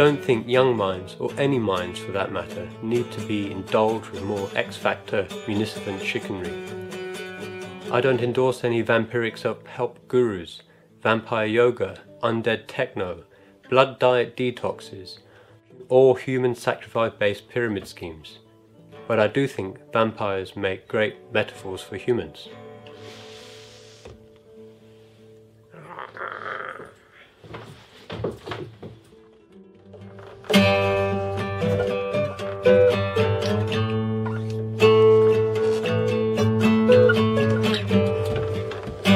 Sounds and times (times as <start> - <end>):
Acoustic guitar: 0.0 - 25.8, 26.7 - 39.1.